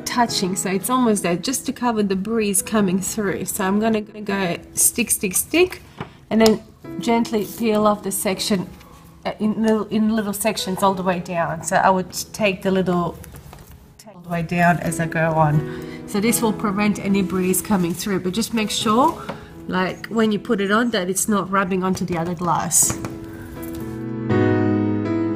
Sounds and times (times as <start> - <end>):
Music: 0.0 - 25.3
Speech: 0.1 - 8.7, 9.3 - 13.2, 14.0 - 23.0.